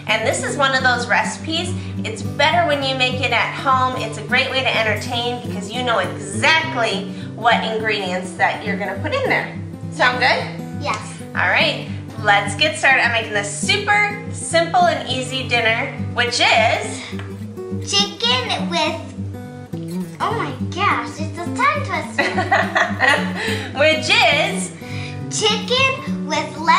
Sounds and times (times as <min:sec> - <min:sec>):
Speech: 0:00.0 - 0:17.0, 0:23.8 - 0:24.7
Music: 0:00.0 - 0:26.7.